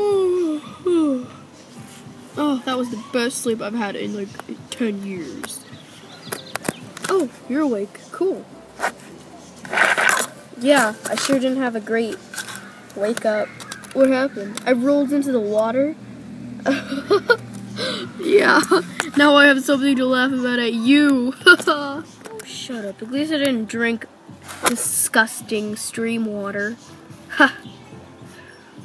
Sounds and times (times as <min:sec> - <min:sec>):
Speech: 0:02.4 - 0:05.7, 0:18.2 - 0:24.1.